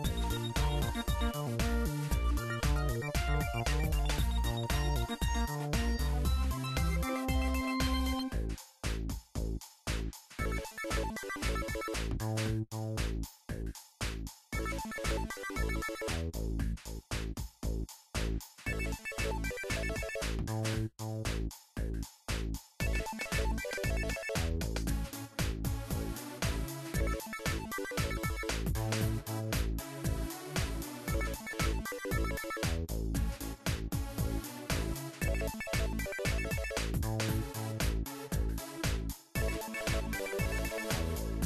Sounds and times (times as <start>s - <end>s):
Music: 0.0s - 41.4s.